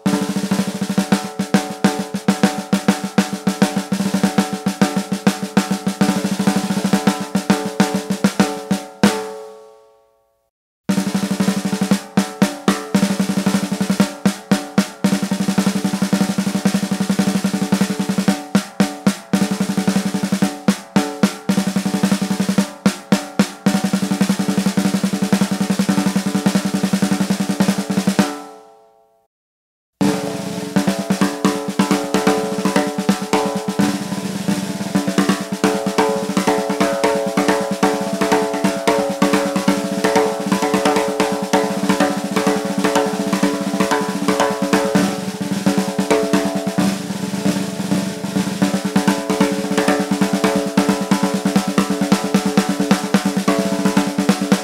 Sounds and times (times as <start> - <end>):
Snare drum: 0.0 - 9.4, 10.9 - 28.5, 30.0 - 54.6.